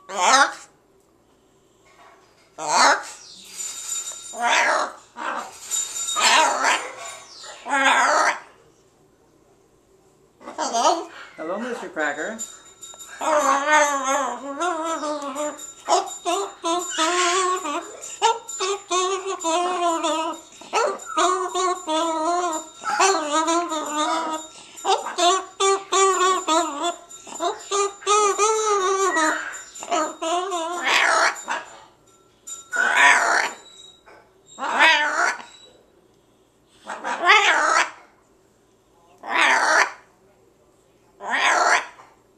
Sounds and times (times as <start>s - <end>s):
Bird: 13.3s - 31.7s.